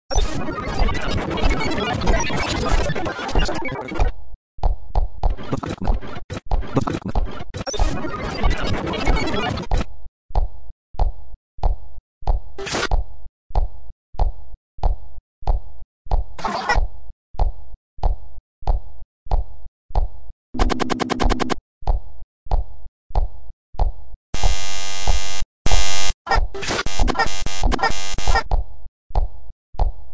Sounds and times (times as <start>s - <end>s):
Sound effect: 0.1s - 30.1s.